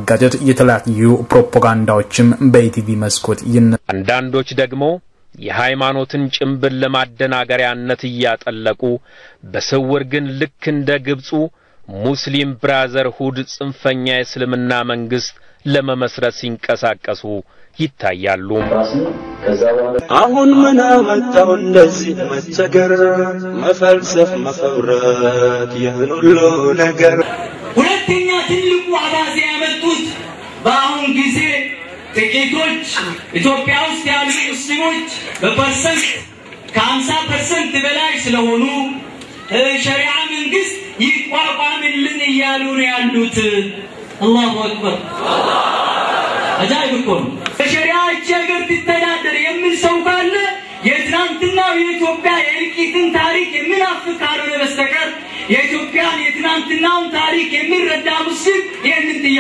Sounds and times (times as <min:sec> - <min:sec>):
Speech: 0:00.0 - 0:45.0, 0:46.6 - 0:59.4.